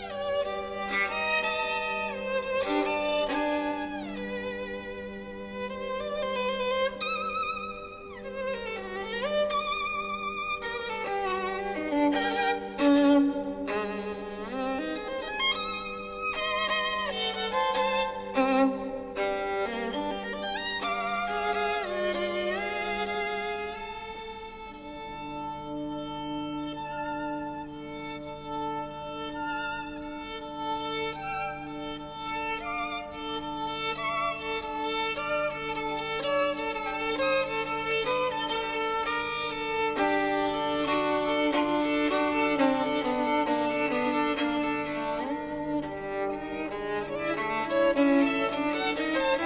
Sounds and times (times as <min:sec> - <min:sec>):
Violin, fiddle: 0:00.0 - 0:49.4.